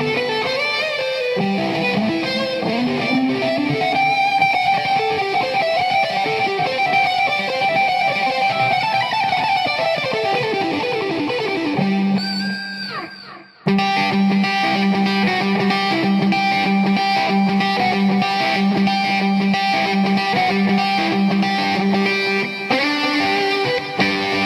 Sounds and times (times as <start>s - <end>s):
Electric guitar: 0.0s - 24.4s.